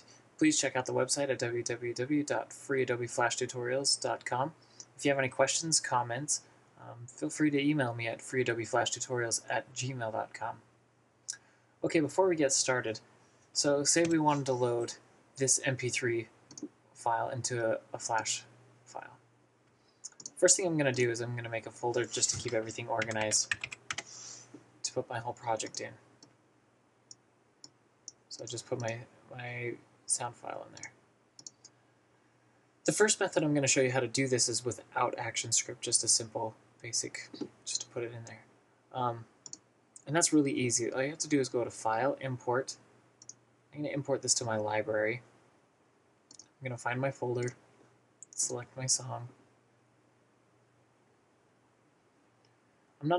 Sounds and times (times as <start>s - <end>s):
Speech: 0.4s - 10.6s, 11.8s - 13.0s, 13.6s - 16.3s, 17.0s - 19.2s, 20.3s - 23.6s, 24.8s - 26.0s, 28.3s - 30.9s, 32.9s - 38.4s, 39.0s - 39.3s, 40.0s - 42.8s, 43.8s - 45.2s, 46.6s - 47.6s, 48.4s - 49.4s.